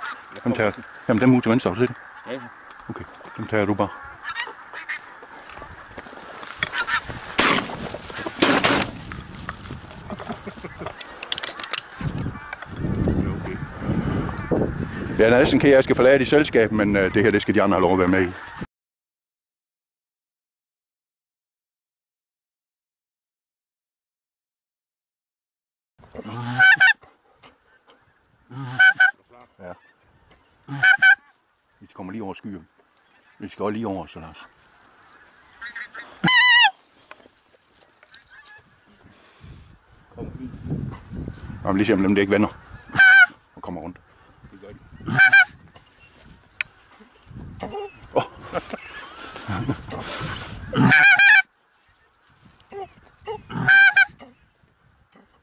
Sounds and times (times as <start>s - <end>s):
Goose: 1.6s - 5.8s, 6.6s - 7.2s, 26.2s - 27.1s, 27.8s - 30.0s, 30.7s - 31.4s, 34.3s - 36.8s, 42.6s - 43.4s, 44.9s - 45.6s, 46.8s - 51.5s, 52.7s - 54.4s.